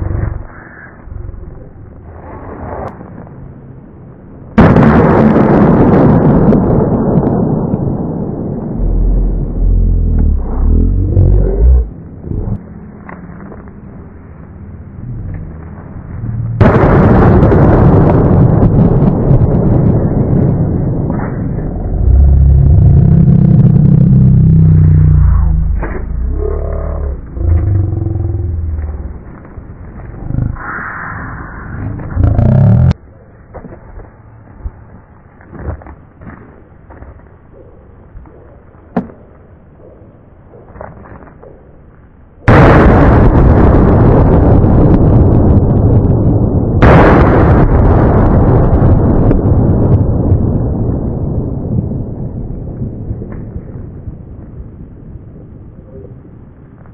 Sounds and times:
Firecracker: 4.6s - 9.0s, 16.6s - 21.6s, 42.5s - 56.6s.

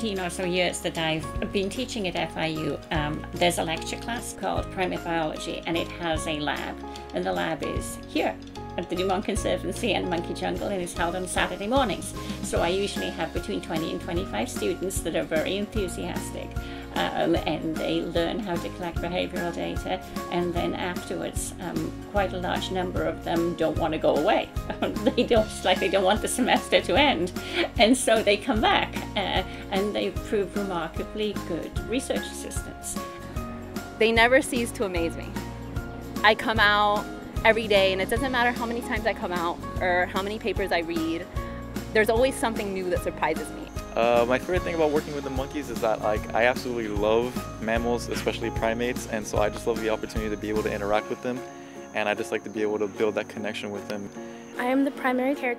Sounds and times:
Music: 0.0s - 55.5s.

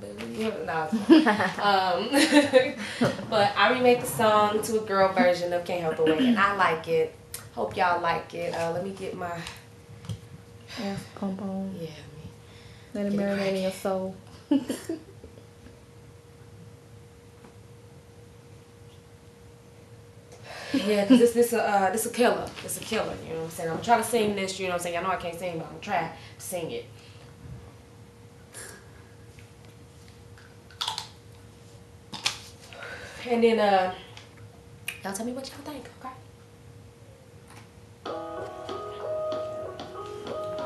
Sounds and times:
Female speech, woman speaking: 0.0s - 9.6s, 10.8s - 12.3s, 13.0s - 14.2s, 20.8s - 26.9s, 33.2s - 34.1s, 35.0s - 36.2s
Music: 38.0s - 40.6s.

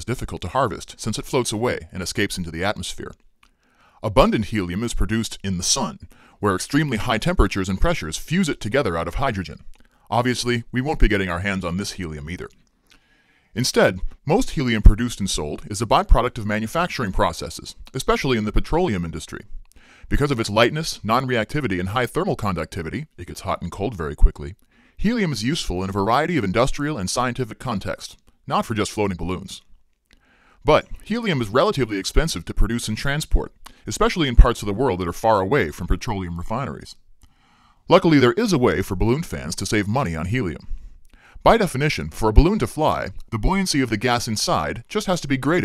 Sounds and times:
Speech: 0.0s - 3.2s, 4.0s - 12.6s, 13.6s - 19.5s, 20.1s - 29.7s, 30.6s - 37.0s, 37.9s - 40.7s, 41.4s - 45.6s.

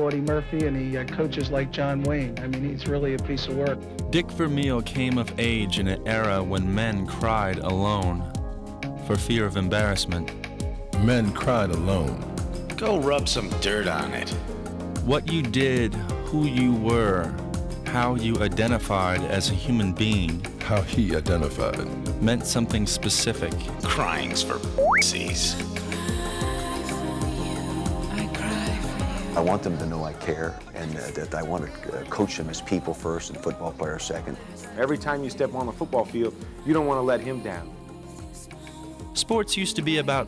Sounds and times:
Speech: 0.0s - 8.3s, 9.1s - 10.3s, 11.0s - 12.2s, 15.0s - 25.6s, 29.4s - 37.7s, 39.2s - 40.2s
Music: 0.0s - 40.2s.

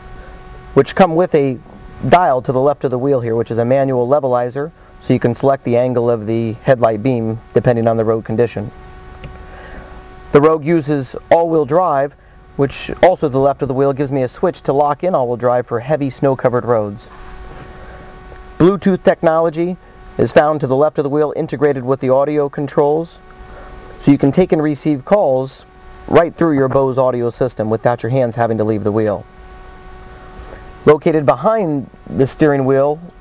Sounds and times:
Speech: 0.8s - 8.7s, 10.3s - 17.1s, 18.6s - 23.2s, 24.0s - 29.3s, 30.8s - 33.2s.

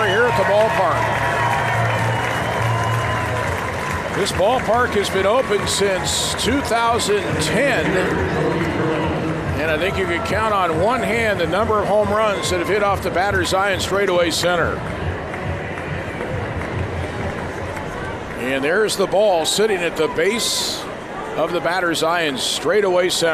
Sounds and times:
Music: 0.0s - 18.4s
Speech: 4.2s - 9.0s, 9.6s - 14.8s, 18.4s - 23.3s.

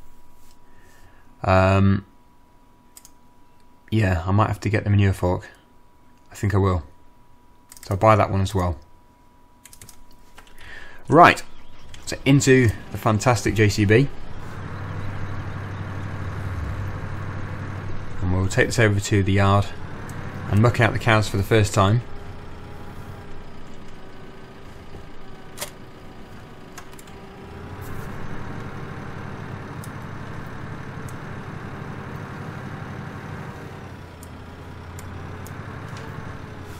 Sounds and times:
Computer keyboard: 9.6s - 10.5s.

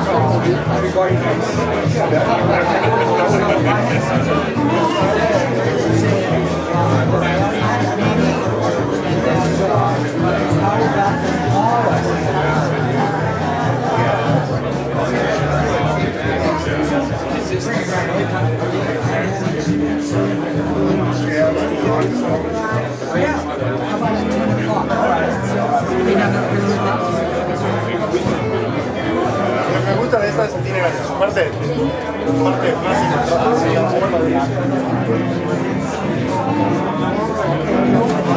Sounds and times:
Speech: 0.0s - 38.3s.

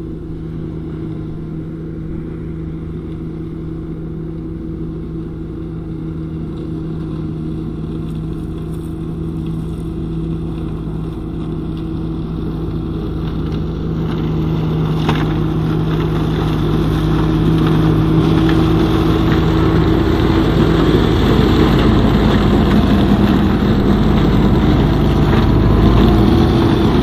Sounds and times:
Outside, urban or manmade: 0.0s - 27.0s
Vehicle: 0.0s - 27.0s.

